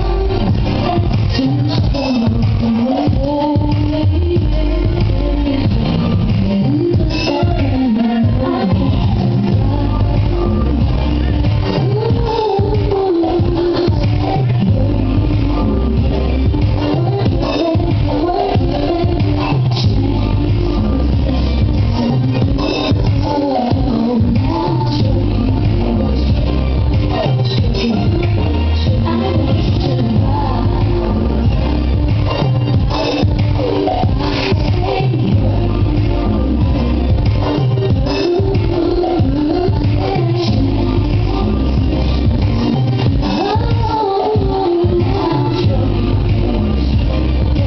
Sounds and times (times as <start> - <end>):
Music: 0.0 - 47.6.